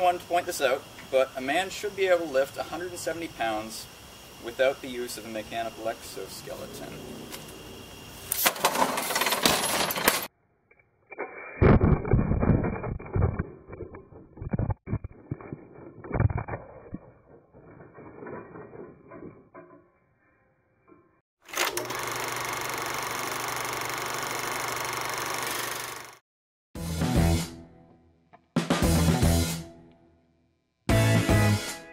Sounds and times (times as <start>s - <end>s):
Outside, rural or natural: 0.0s - 21.9s.